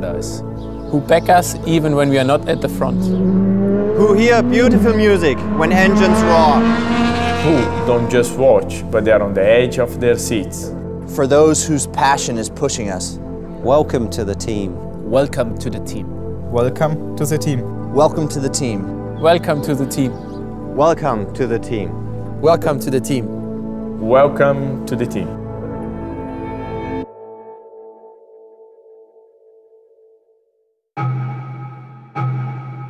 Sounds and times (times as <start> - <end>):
Music: 0.0 - 32.9
Speech: 1.0 - 3.0, 4.0 - 6.6, 7.4 - 20.2, 20.8 - 23.3, 24.0 - 25.3.